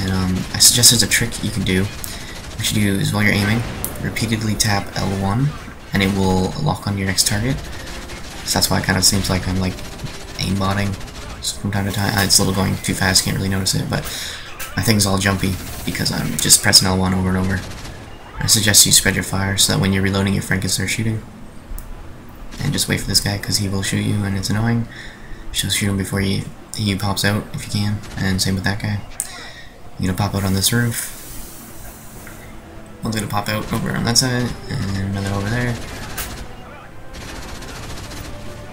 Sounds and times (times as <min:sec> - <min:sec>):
Speech: 0:00.0 - 0:07.7, 0:08.4 - 0:21.2, 0:22.6 - 0:24.9, 0:25.6 - 0:31.1, 0:33.0 - 0:37.0.